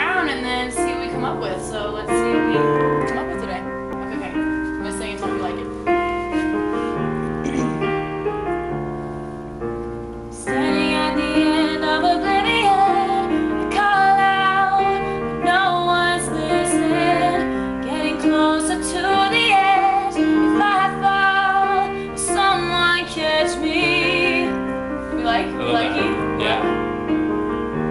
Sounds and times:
Speech: 0.0s - 5.7s, 25.4s - 26.8s
Music: 0.0s - 27.9s.

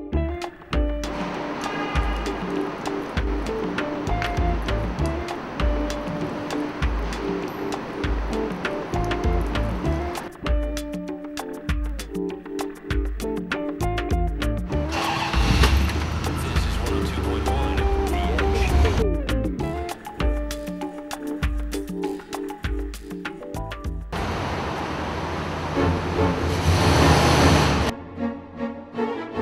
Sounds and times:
Music: 0.0s - 24.2s, 27.9s - 29.4s
Vehicle: 14.7s - 19.0s, 24.1s - 27.9s
Speech: 16.3s - 19.1s.

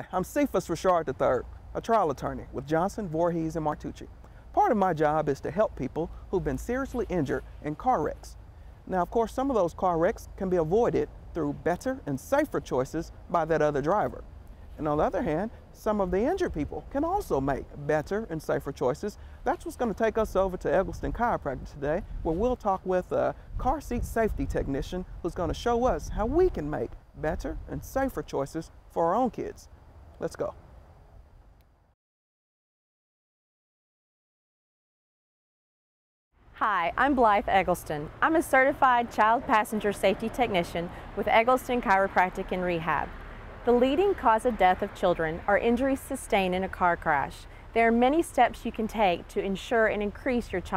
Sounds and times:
Speech: 0.0s - 14.2s, 14.8s - 30.6s, 36.6s - 43.1s, 43.7s - 50.7s.

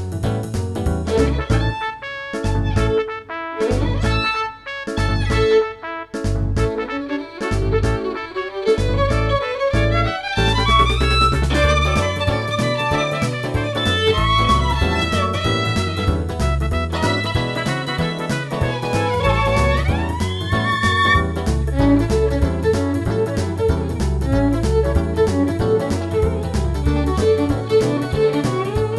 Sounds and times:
Rock and roll: 8.8s - 28.9s.

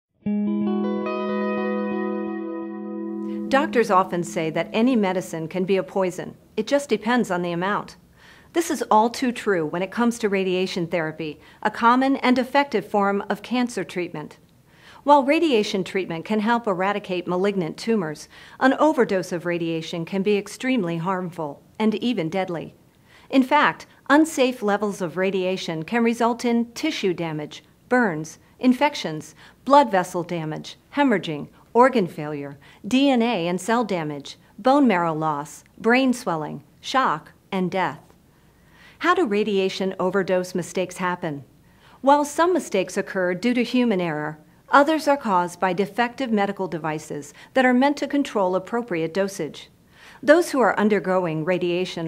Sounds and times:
Music: 0.2s - 5.5s
Speech: 3.5s - 14.4s, 15.0s - 38.1s, 39.0s - 52.0s.

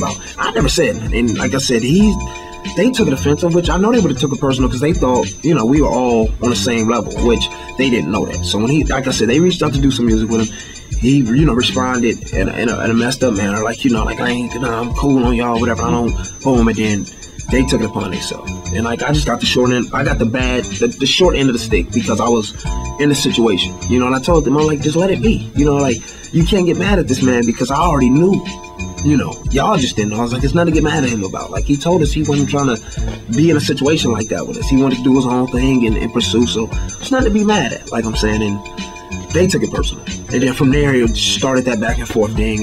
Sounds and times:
Speech: 0.0s - 2.2s, 2.8s - 28.4s, 29.0s - 38.6s, 39.3s - 42.6s.

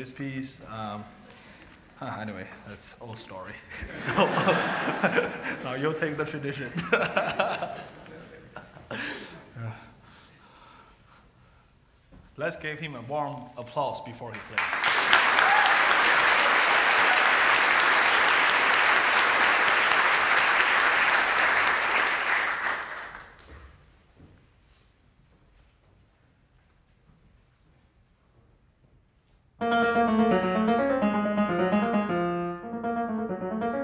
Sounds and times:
Speech: 0.0s - 1.2s, 2.0s - 3.7s, 5.6s - 6.8s, 12.4s - 14.6s.

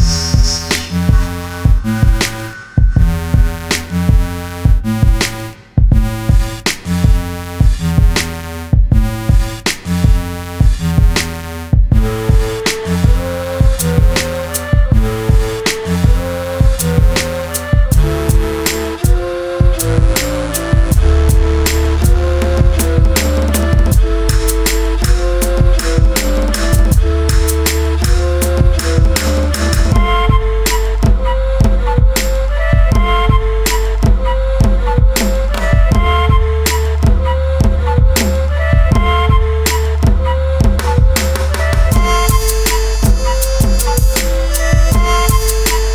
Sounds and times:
Exciting music: 0.0s - 45.9s.

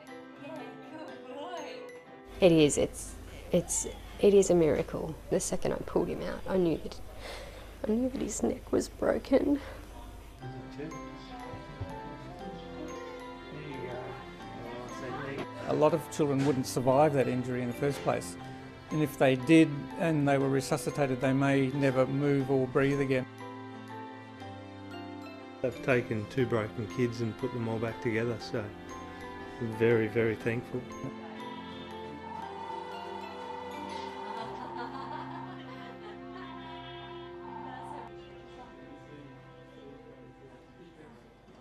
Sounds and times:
Music: 0.0s - 41.6s.

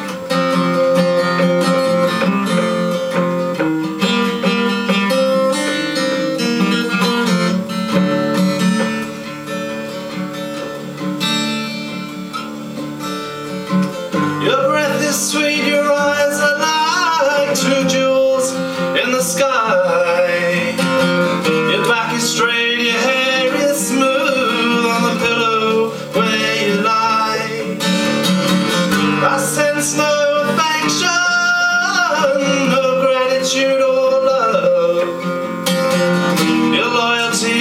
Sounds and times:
Music: 0.0s - 37.6s.

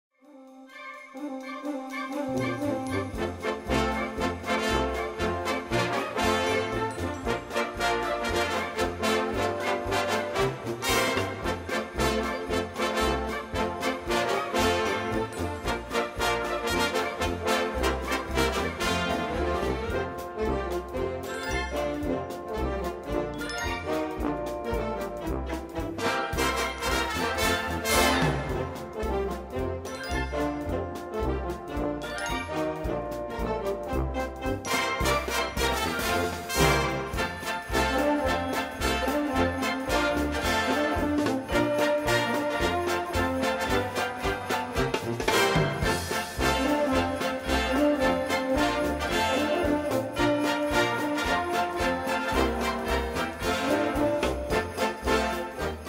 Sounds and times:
Music: 0.1s - 55.8s.

